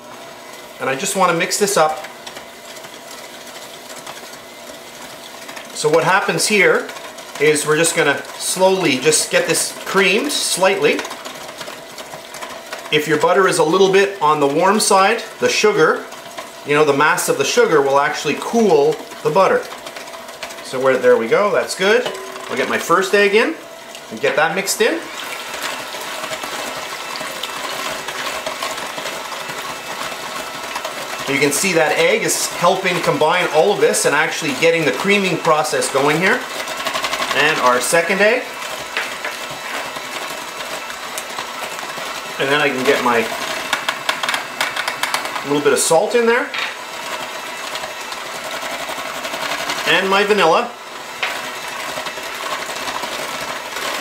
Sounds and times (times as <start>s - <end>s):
Stir: 0.0s - 54.0s.